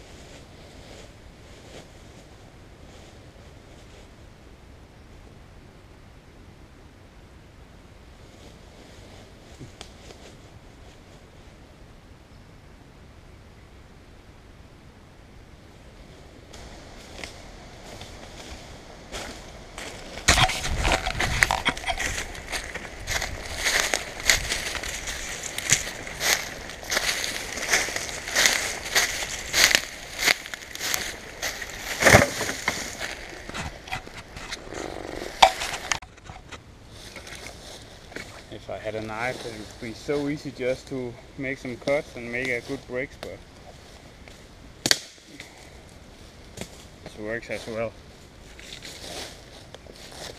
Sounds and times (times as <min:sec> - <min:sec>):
Outside, rural or natural: 0:00.0 - 0:50.3
Speech: 0:38.4 - 0:43.4, 0:47.1 - 0:48.0.